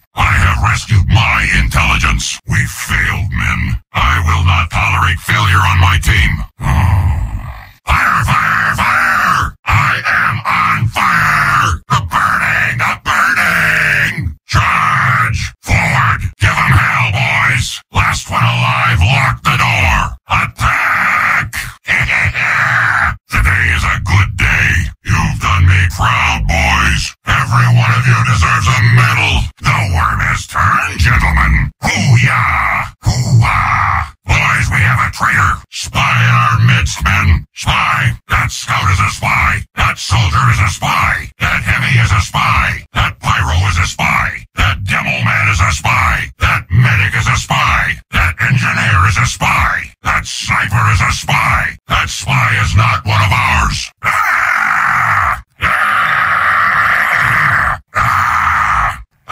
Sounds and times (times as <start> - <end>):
Speech: 0.0 - 59.3.